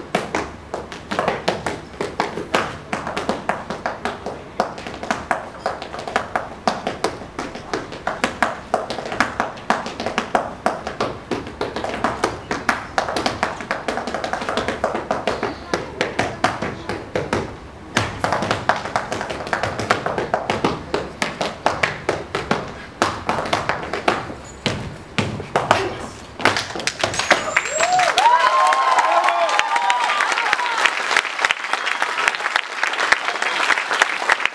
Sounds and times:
Inside, public space: 0.0 - 34.5.

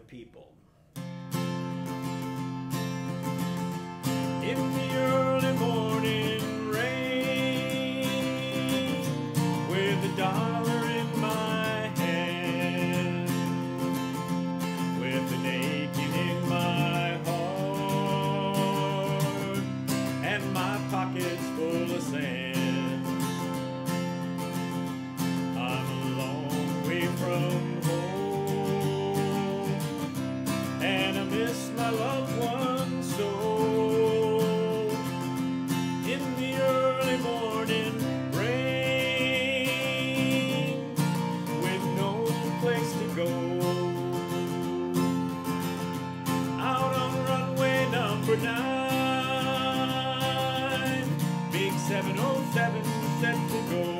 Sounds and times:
Speech: 0.0 - 0.6
Strum: 0.0 - 54.0.

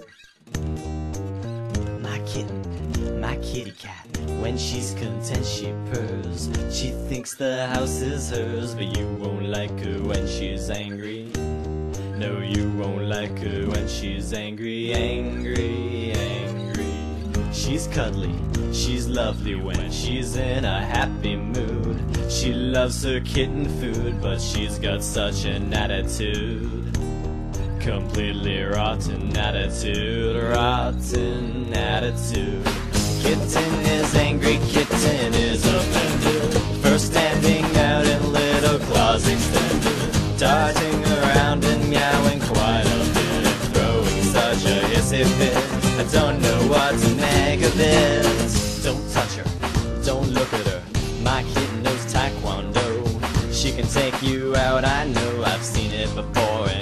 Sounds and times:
Music: 0.0 - 56.8.

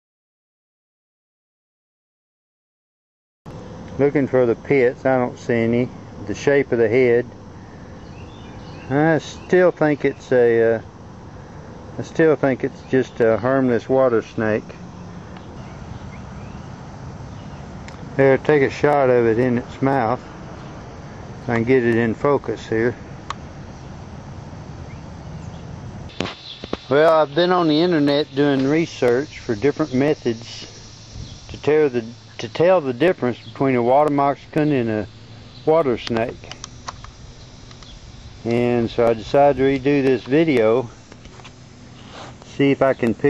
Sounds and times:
Speech: 4.0 - 7.3, 8.9 - 10.9, 12.0 - 14.8, 18.2 - 20.2, 21.5 - 23.0, 26.9 - 30.7, 31.5 - 35.1, 35.7 - 36.6, 38.4 - 41.0, 42.5 - 43.2.

